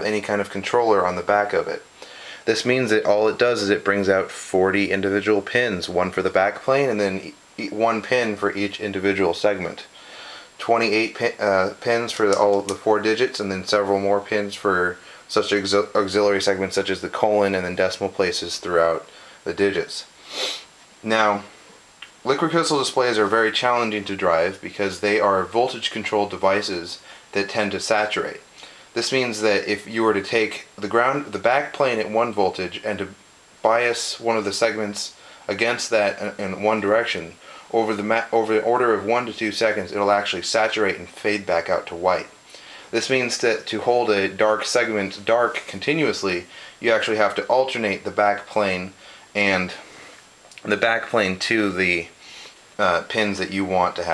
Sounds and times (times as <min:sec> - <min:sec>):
Speech: 0:00.0 - 0:49.9, 0:50.6 - 0:52.2, 0:52.8 - 0:54.1.